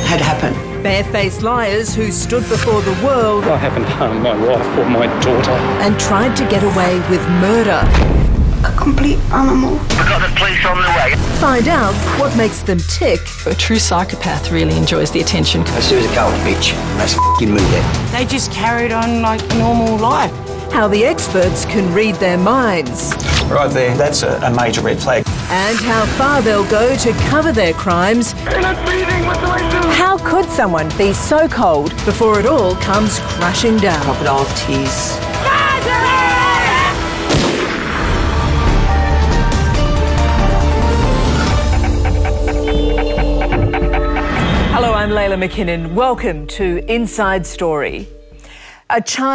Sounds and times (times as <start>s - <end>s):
Music: 0.0s - 49.3s.